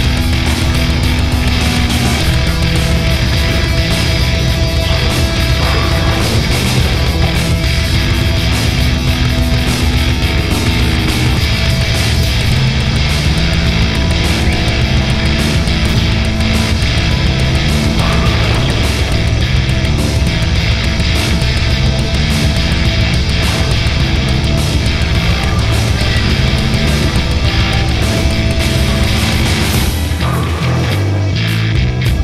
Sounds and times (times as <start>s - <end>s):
Angry music: 0.0s - 32.2s.